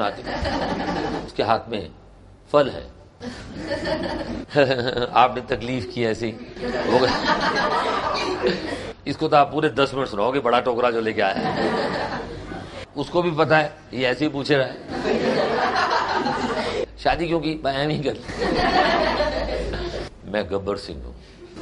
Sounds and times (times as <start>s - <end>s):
Speech: 1.3s - 3.0s, 4.6s - 7.2s, 9.1s - 11.4s, 13.0s - 14.8s, 17.0s - 18.2s, 20.2s - 21.2s.